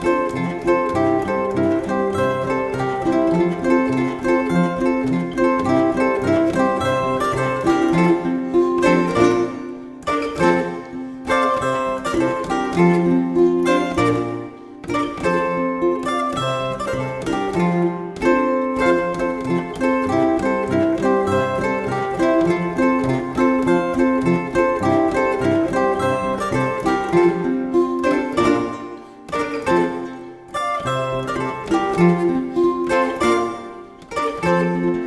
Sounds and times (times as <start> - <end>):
Zither: 0.0 - 35.0.